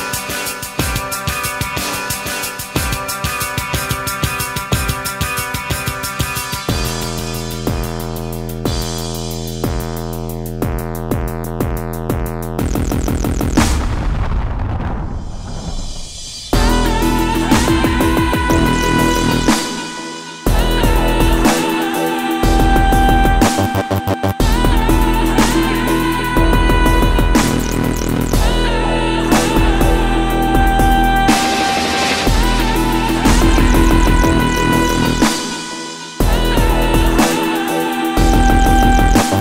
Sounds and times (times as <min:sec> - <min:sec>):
Dubstep: 0:00.0 - 0:14.1, 0:16.0 - 0:39.4.